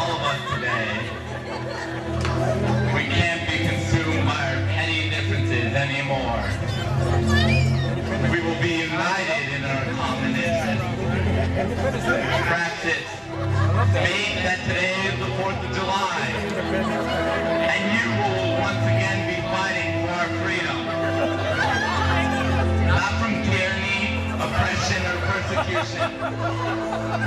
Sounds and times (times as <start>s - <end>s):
Male speech, man speaking: 0.0s - 1.1s, 2.9s - 6.6s, 8.2s - 11.1s, 12.0s - 13.2s, 13.9s - 16.4s, 17.6s - 20.9s, 22.9s - 26.1s
Music: 0.0s - 27.2s.